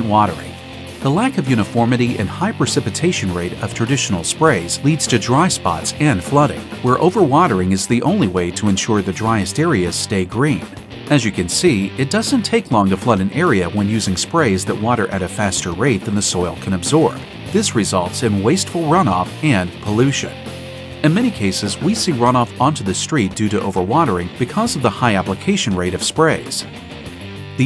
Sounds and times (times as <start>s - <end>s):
Speech: 0.0s - 20.4s, 21.0s - 26.8s
Music: 0.0s - 27.6s.